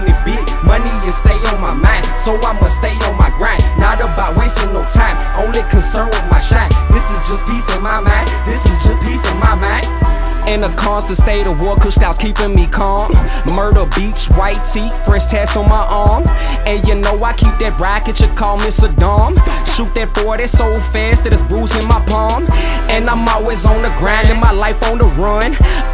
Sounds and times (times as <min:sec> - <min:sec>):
Music: 0:00.0 - 0:25.9.